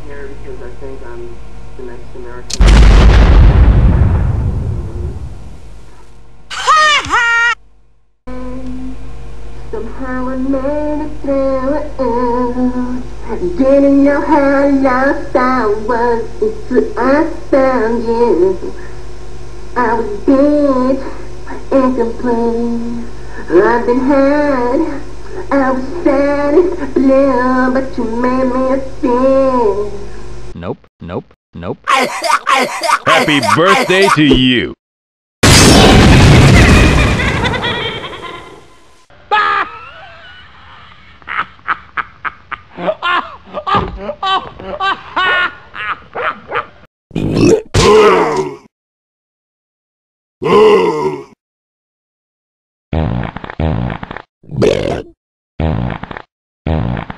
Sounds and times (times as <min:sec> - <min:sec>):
Grunt: 0:47.1 - 0:48.7, 0:50.4 - 0:51.4, 0:54.5 - 0:55.2.